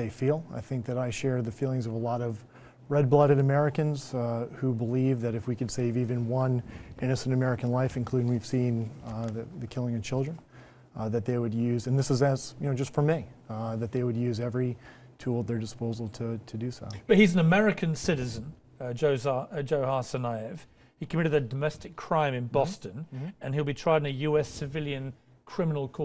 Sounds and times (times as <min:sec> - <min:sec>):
Speech: 0:00.0 - 0:10.4, 0:11.0 - 0:26.0.